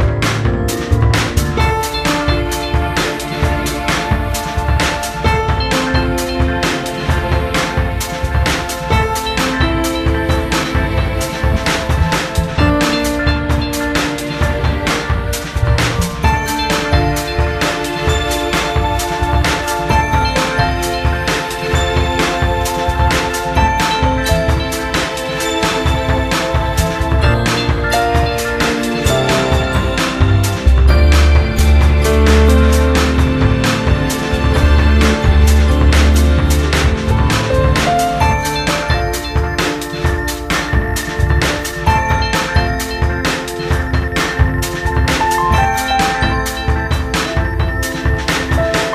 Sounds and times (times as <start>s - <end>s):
Music: 0.0s - 48.9s.